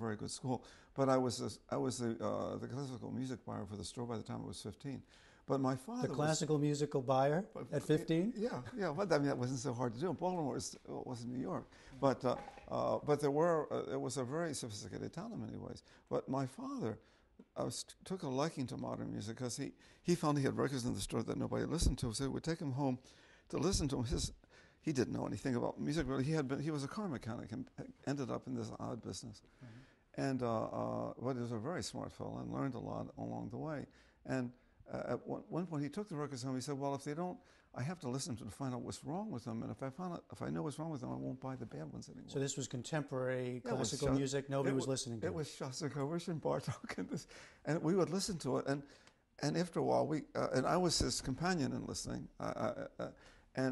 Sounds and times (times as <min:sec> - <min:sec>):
Speech: 0:00.0 - 0:29.5, 0:30.1 - 0:53.7.